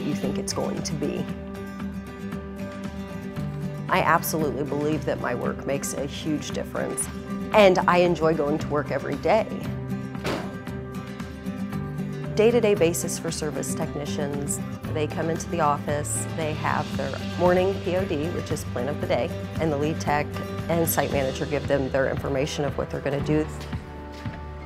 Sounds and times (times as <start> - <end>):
Speech: 0.0 - 1.3, 3.9 - 9.6, 12.4 - 23.5
Music: 0.0 - 24.6.